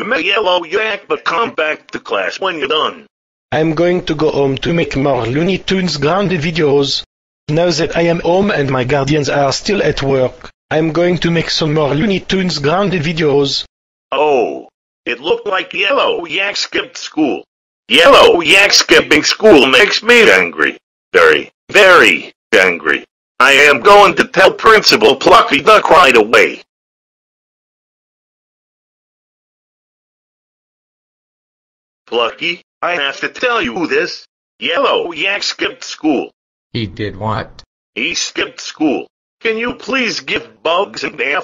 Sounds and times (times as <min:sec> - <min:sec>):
Speech: 0:00.0 - 0:26.7, 0:32.1 - 0:41.4.